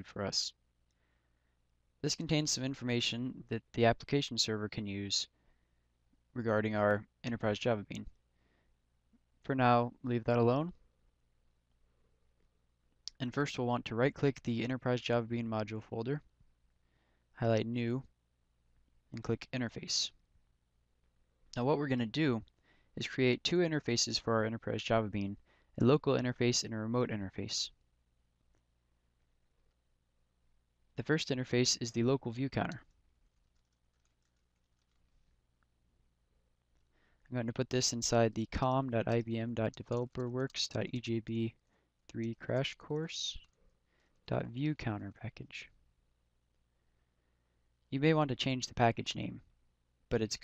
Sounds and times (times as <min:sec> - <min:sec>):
Speech: 0:00.0 - 0:00.6, 0:02.0 - 0:05.4, 0:06.3 - 0:08.2, 0:09.4 - 0:10.8, 0:13.1 - 0:16.3, 0:17.4 - 0:18.1, 0:19.1 - 0:20.2, 0:21.6 - 0:27.8, 0:31.0 - 0:32.9, 0:37.3 - 0:43.5, 0:44.3 - 0:45.8, 0:47.9 - 0:49.5, 0:50.1 - 0:50.4.